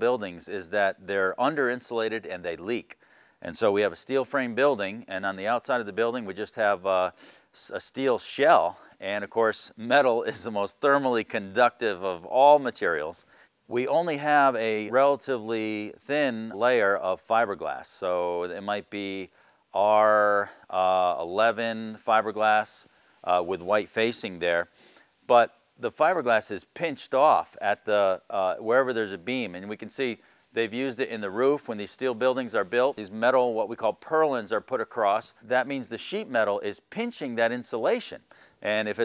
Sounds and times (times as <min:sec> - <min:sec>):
Speech: 0:00.0 - 0:24.7, 0:25.3 - 0:39.0.